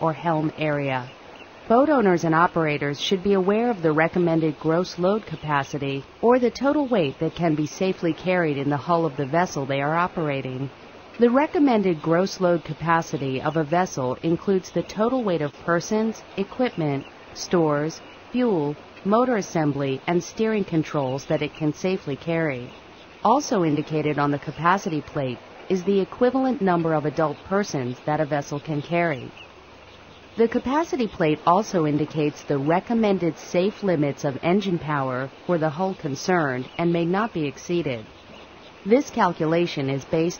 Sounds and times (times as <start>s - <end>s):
Speech: 0.0s - 29.4s, 30.4s - 38.1s, 38.9s - 40.3s.